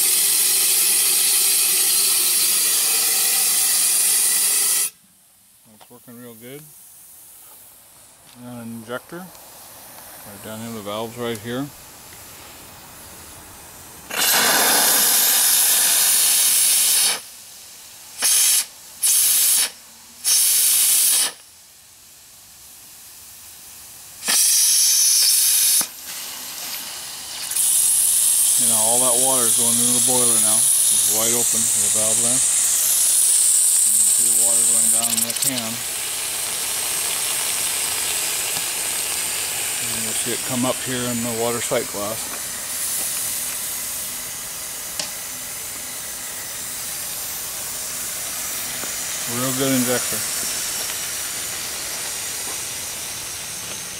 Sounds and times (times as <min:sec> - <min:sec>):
Steam: 0:00.0 - 0:05.0, 0:08.7 - 0:54.0.